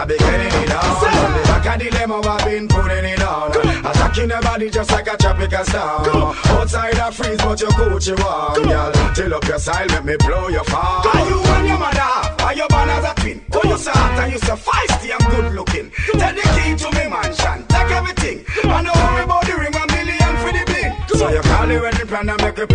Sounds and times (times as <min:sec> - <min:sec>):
Pop music: 0:00.0 - 0:22.7.